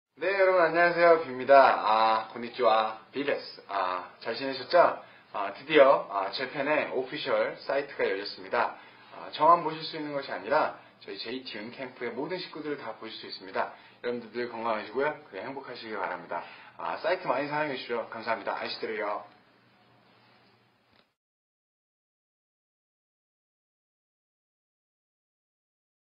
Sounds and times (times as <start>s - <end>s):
Speech: 0.2s - 19.4s.